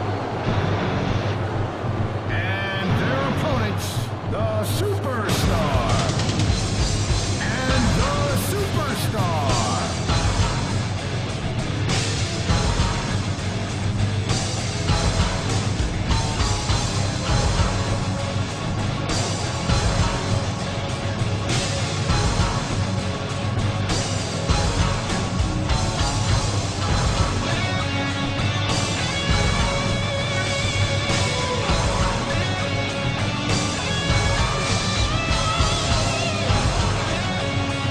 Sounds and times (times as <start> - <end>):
Music: 0.0 - 37.9.